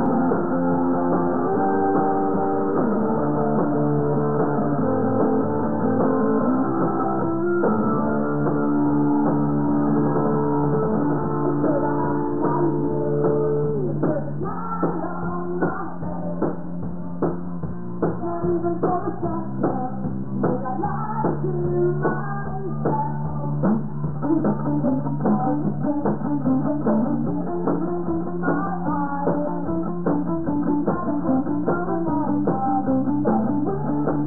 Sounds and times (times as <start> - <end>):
Music: 0.0 - 34.2.